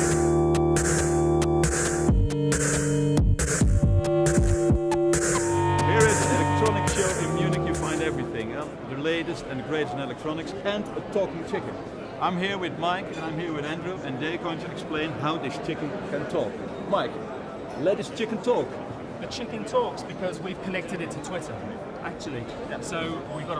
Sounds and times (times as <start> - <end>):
Speech: 5.8 - 17.2, 17.8 - 23.5.